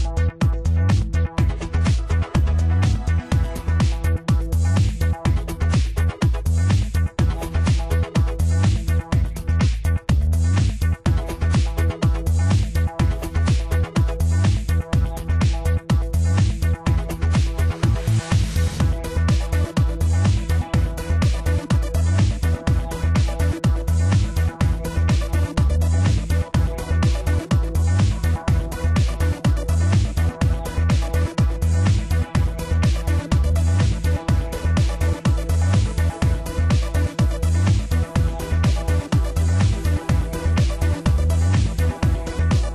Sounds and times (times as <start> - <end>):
Music: 0.0 - 42.7.